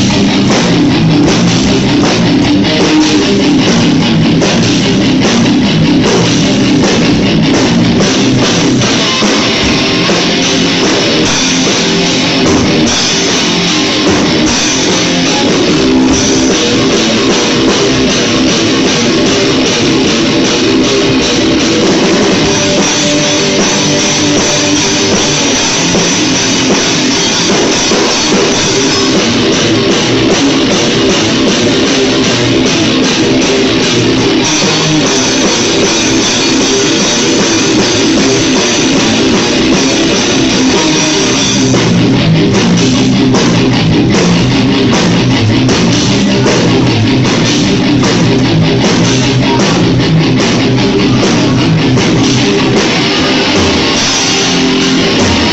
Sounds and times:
Bass drum: 0.0 - 55.5
Drum kit: 0.0 - 55.5
Heavy metal: 0.0 - 55.5.

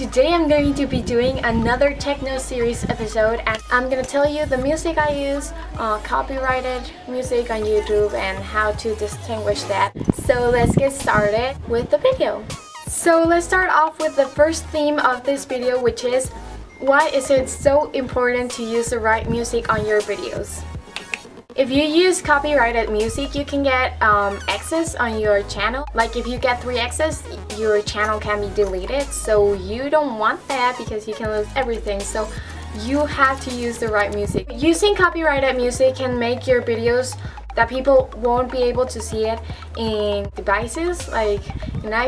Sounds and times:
Speech: 0.0 - 20.6, 21.6 - 42.0
Techno: 0.0 - 20.9, 21.5 - 42.0.

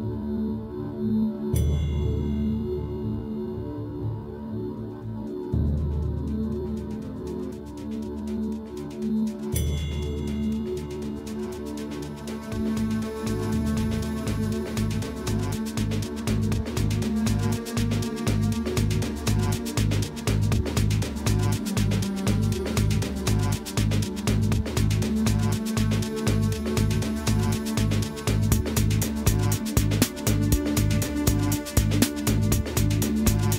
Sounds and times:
Music: 0.0 - 33.5.

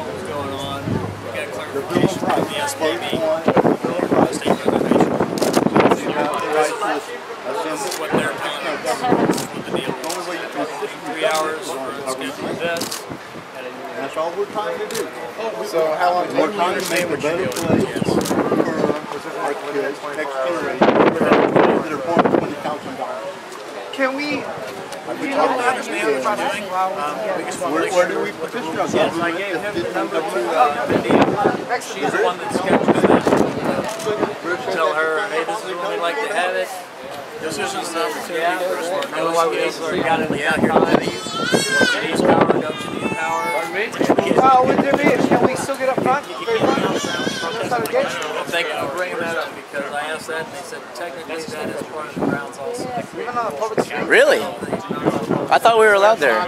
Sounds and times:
Conversation: 0.0 - 56.4
Male speech, man speaking: 0.0 - 56.4.

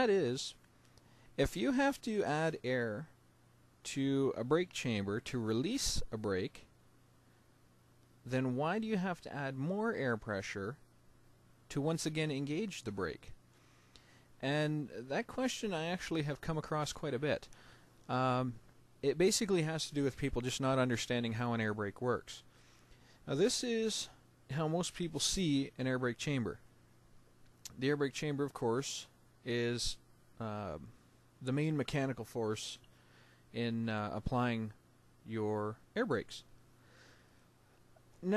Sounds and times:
Speech: 0.0 - 0.6, 1.4 - 3.2, 3.8 - 6.7, 8.2 - 10.8, 11.7 - 13.4, 14.4 - 17.5, 18.1 - 22.5, 23.2 - 26.6, 27.7 - 32.8, 33.5 - 36.5.

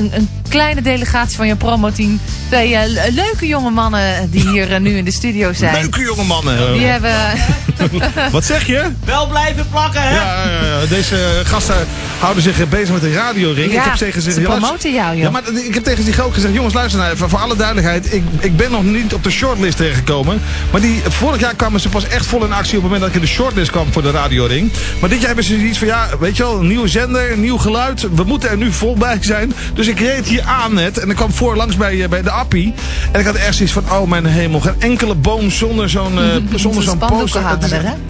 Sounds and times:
Music: 0.0 - 38.0
Speech: 0.0 - 38.0
Radio: 5.6 - 8.3, 36.2 - 36.8.

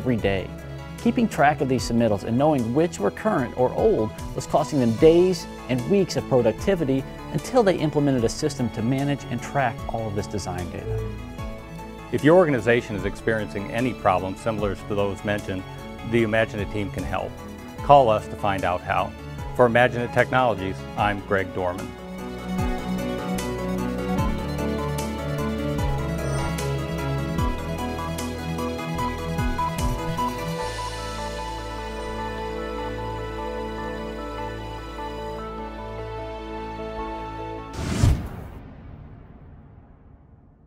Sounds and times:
Speech: 0.0 - 0.5, 1.1 - 11.0, 12.2 - 21.9
Music: 0.0 - 39.8.

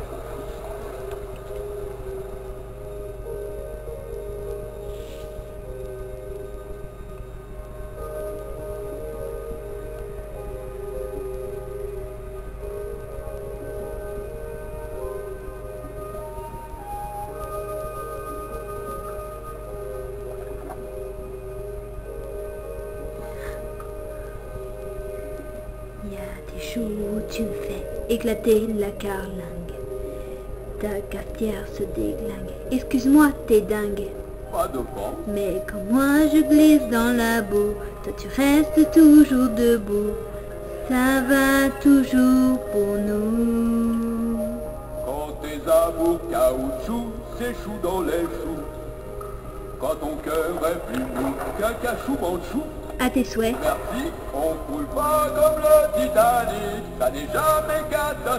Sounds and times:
Music: 0.0 - 58.3
Speech: 26.0 - 29.8, 30.8 - 40.1, 49.8 - 57.2.

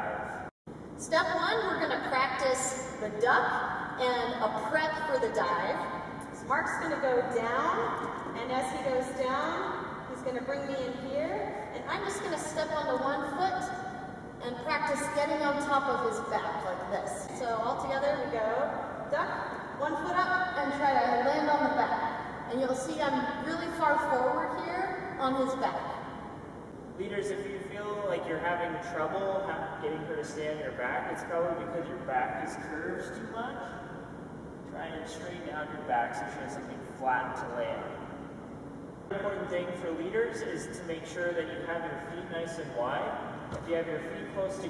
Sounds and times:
Speech: 6.4 - 13.8, 14.4 - 25.9, 34.8 - 37.9, 39.1 - 44.6.

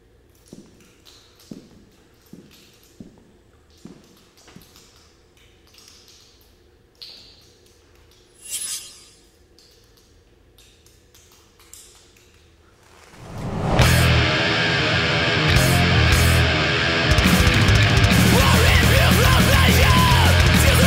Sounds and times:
Music: 13.8 - 20.8.

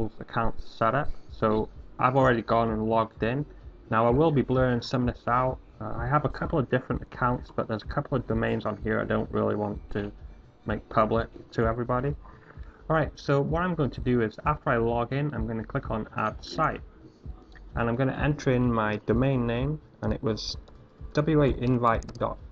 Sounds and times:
Speech: 0.0 - 12.2, 12.9 - 16.8, 17.8 - 20.6, 21.2 - 22.4.

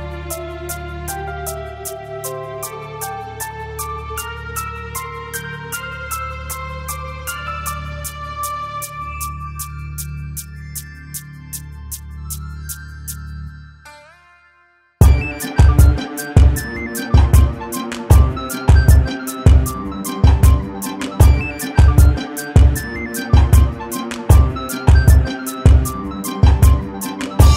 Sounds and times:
Dubstep: 15.0 - 27.5.

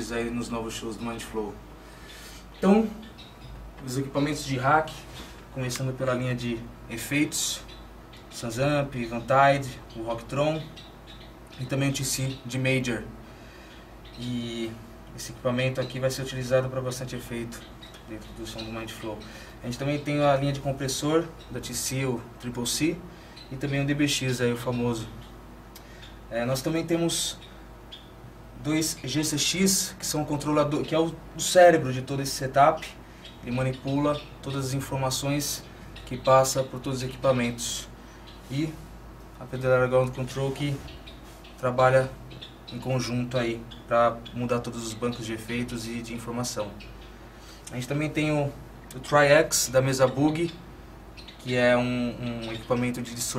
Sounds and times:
Speech: 0.0 - 1.6, 2.6 - 3.1, 3.8 - 7.7, 8.3 - 10.8, 11.6 - 13.2, 14.2 - 25.3, 26.3 - 27.5, 28.6 - 38.8, 39.4 - 40.9, 41.6 - 46.9, 47.7 - 50.6, 51.4 - 53.3.

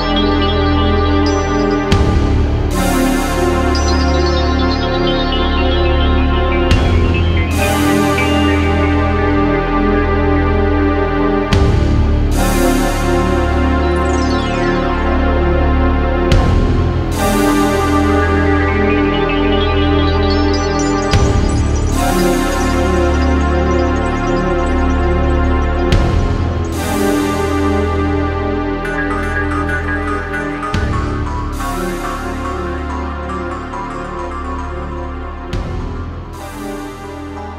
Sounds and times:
Soundtrack music: 0.0 - 37.5
Theme music: 0.0 - 37.5.

